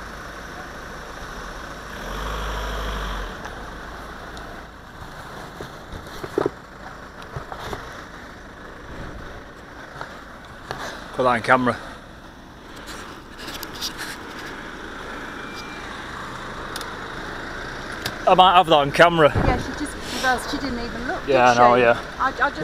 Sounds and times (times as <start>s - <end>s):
Speech: 18.3s - 22.6s.